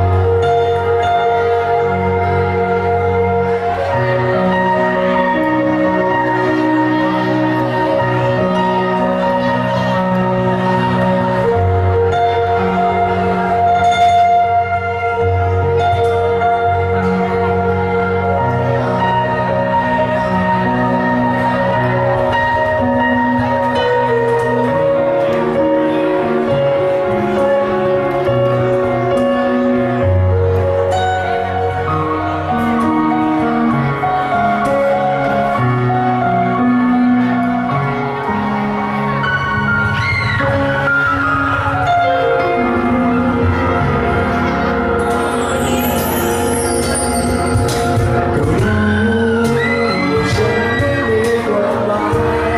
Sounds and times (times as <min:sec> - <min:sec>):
Music: 0:00.0 - 0:52.5.